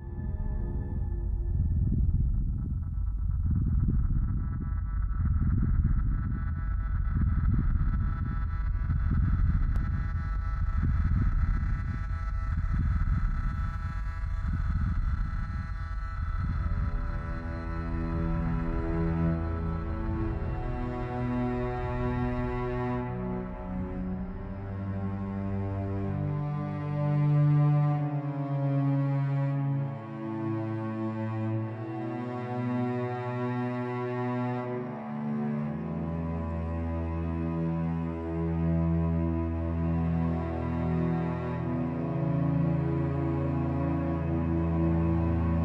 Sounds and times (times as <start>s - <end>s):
Independent music: 0.0s - 45.6s.